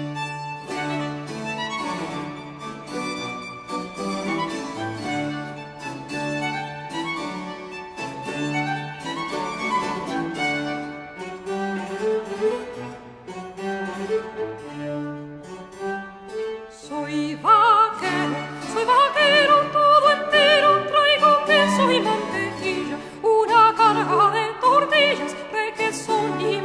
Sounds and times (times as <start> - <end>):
Music: 0.0 - 26.6.